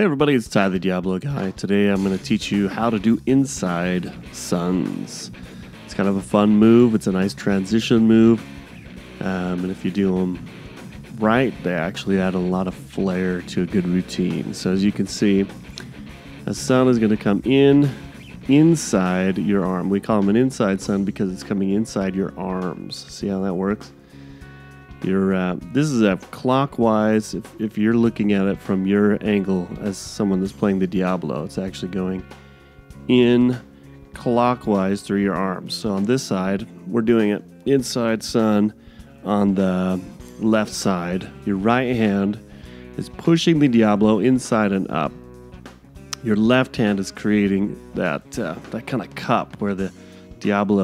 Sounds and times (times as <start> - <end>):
Speech: 0.0 - 8.5, 9.2 - 10.4, 11.1 - 15.6, 16.5 - 24.0, 25.0 - 32.3, 33.1 - 42.4, 43.0 - 45.2, 46.2 - 50.8
Music: 0.0 - 50.8.